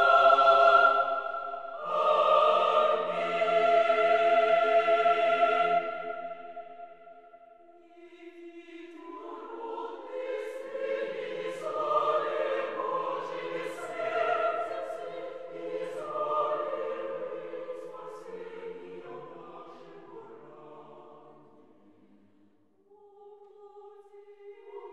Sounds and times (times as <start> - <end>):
Choir: 0.0 - 24.9.